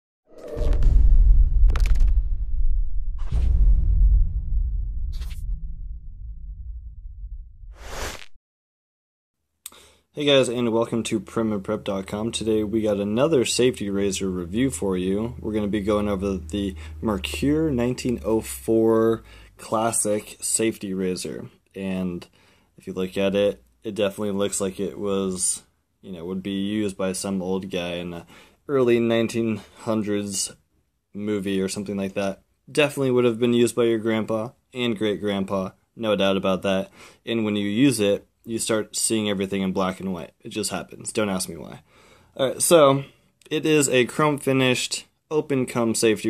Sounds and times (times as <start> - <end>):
Whoosh, swoosh, swish: 5.0 - 5.8, 7.6 - 8.4.